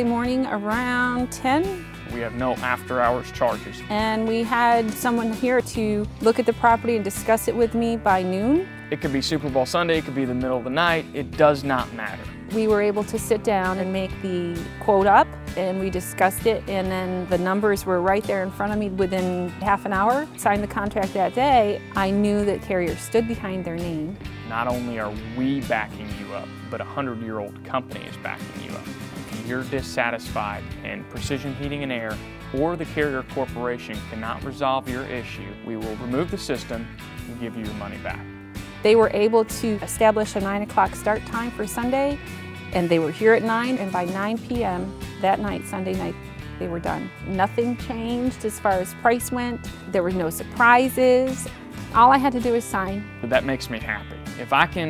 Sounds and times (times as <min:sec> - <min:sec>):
Music: 0:00.0 - 0:54.9.